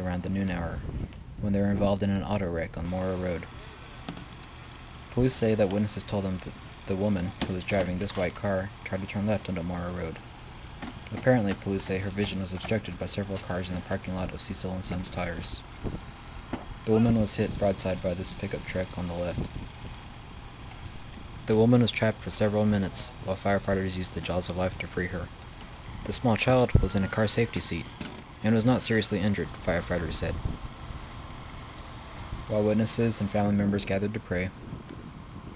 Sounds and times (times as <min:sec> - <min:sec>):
Speech: 0:00.0 - 0:00.8, 0:01.4 - 0:03.8, 0:05.1 - 0:10.2, 0:11.1 - 0:15.6, 0:16.9 - 0:19.5, 0:21.5 - 0:25.3, 0:26.1 - 0:30.4, 0:32.5 - 0:34.6
Vehicle: 0:00.0 - 0:35.5.